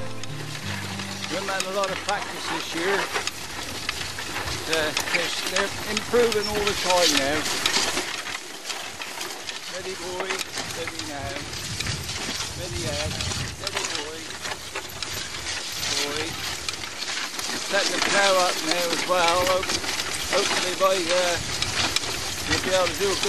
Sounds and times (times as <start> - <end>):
Speech: 1.3 - 3.2, 4.6 - 7.5, 9.7 - 11.4, 12.6 - 14.3, 15.9 - 16.4, 17.7 - 19.7, 20.3 - 21.4, 22.5 - 23.2.